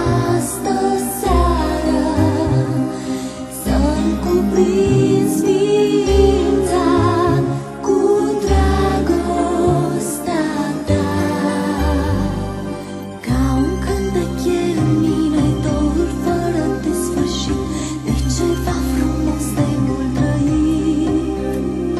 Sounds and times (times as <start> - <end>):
Christian music: 0.0 - 21.9
Christmas music: 0.0 - 21.9.